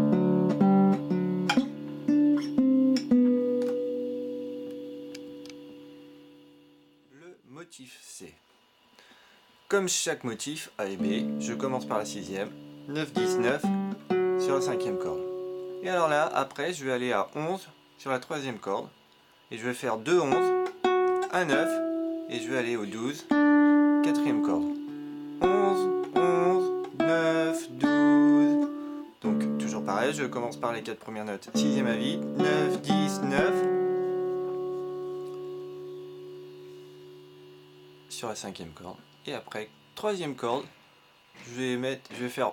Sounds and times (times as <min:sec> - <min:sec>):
Acoustic guitar: 0:00.0 - 0:06.4, 0:11.0 - 0:16.0, 0:20.3 - 0:38.1
Speech: 0:07.1 - 0:08.4, 0:09.7 - 0:13.8, 0:14.4 - 0:20.6, 0:21.3 - 0:23.4, 0:24.0 - 0:24.8, 0:25.4 - 0:33.7, 0:38.1 - 0:40.8, 0:41.4 - 0:42.5.